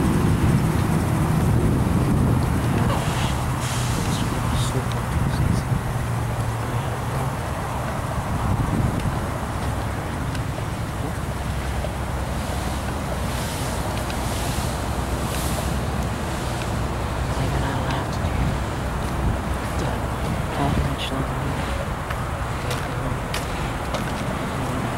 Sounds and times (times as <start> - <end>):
Truck: 0.0 - 24.9
Speech: 2.8 - 5.8, 17.3 - 18.7, 19.7 - 21.9, 22.6 - 23.5, 24.4 - 24.9.